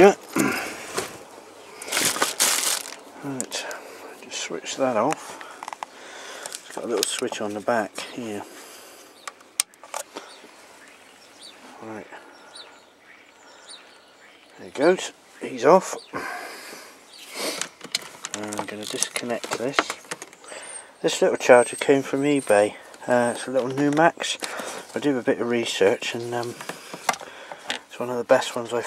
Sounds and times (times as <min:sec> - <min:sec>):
Speech: 0:03.2 - 0:05.2, 0:06.8 - 0:08.5, 0:11.8 - 0:12.2, 0:14.6 - 0:16.1, 0:18.4 - 0:20.0, 0:21.0 - 0:26.6, 0:27.9 - 0:28.8
Chirp, tweet: 0:09.1 - 0:16.2, 0:17.0 - 0:17.4.